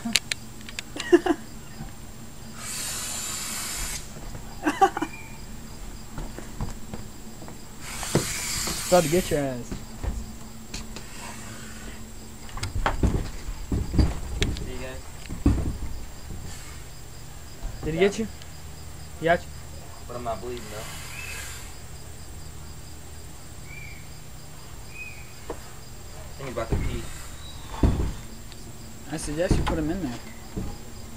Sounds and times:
Outside, rural or natural: 0.0s - 31.1s
Snake: 2.4s - 4.2s, 7.8s - 9.7s, 10.8s - 12.4s, 16.2s - 18.6s, 19.8s - 22.9s, 24.8s - 31.1s.

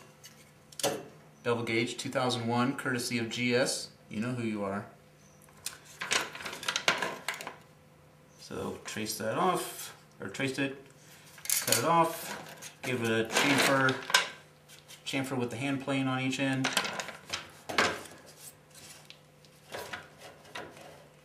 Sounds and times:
Speech: 1.4s - 5.0s, 8.4s - 10.8s, 11.7s - 14.1s, 15.1s - 16.8s.

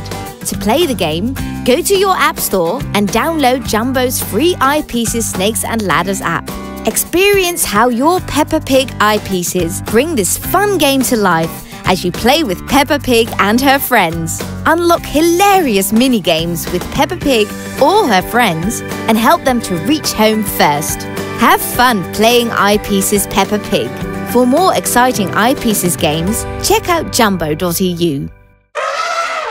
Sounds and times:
Music: 0.0s - 28.8s
Speech: 0.4s - 28.3s.

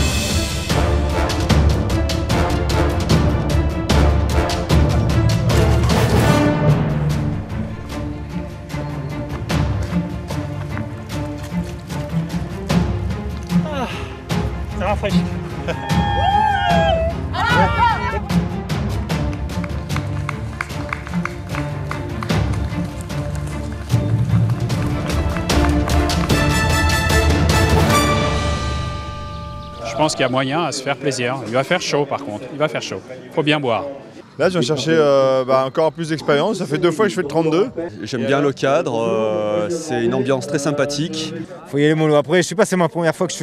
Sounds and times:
Music: 0.0s - 31.1s.

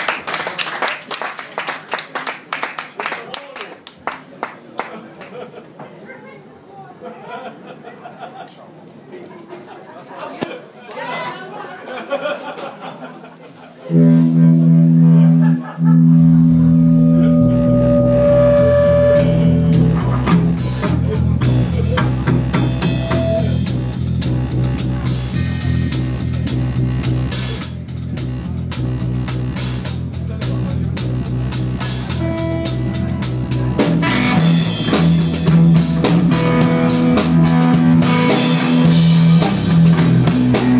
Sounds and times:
Music: 13.9s - 40.7s.

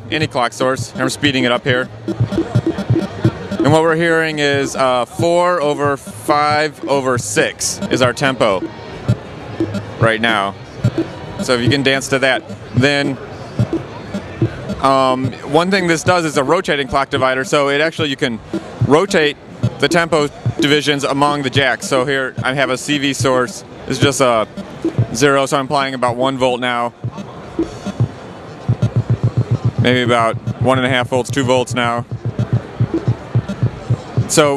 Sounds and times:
Speech: 0.0s - 8.7s, 10.0s - 10.6s, 11.4s - 27.2s, 28.9s - 32.1s, 33.4s - 34.5s.

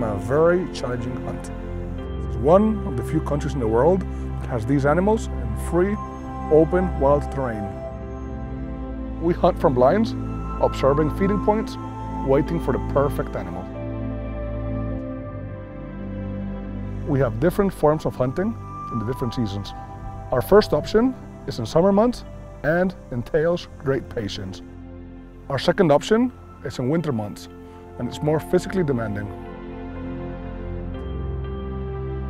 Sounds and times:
Speech: 0.0s - 1.5s, 2.4s - 7.8s, 9.2s - 13.7s, 17.1s - 24.6s, 25.5s - 29.4s
Music: 0.0s - 32.3s.

